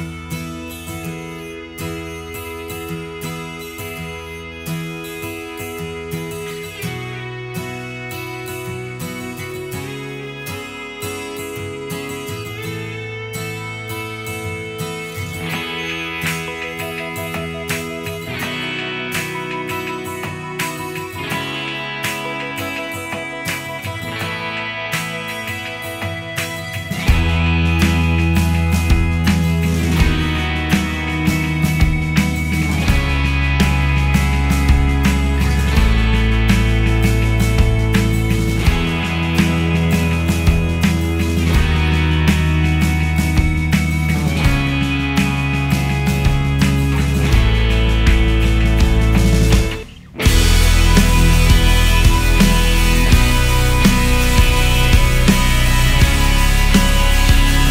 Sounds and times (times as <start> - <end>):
Music: 0.0 - 57.7.